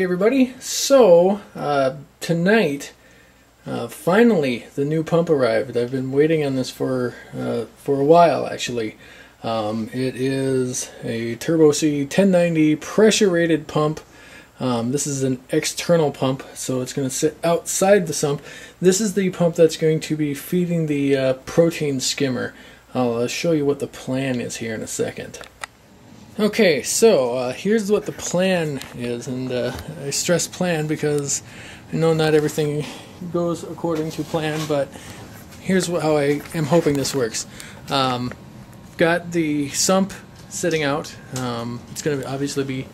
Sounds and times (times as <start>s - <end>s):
Speech: 0.0s - 3.0s, 3.6s - 25.5s, 26.4s - 35.0s, 35.6s - 42.9s.